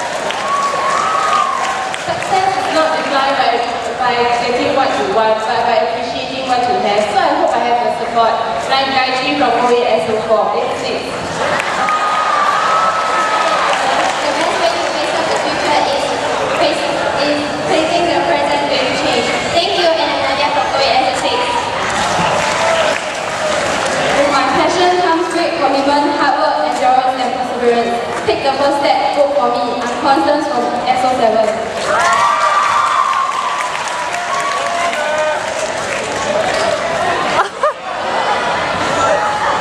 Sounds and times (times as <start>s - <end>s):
Inside, large room or hall: 0.0s - 39.6s
Speech: 2.1s - 11.1s, 13.8s - 21.7s, 24.2s - 31.6s.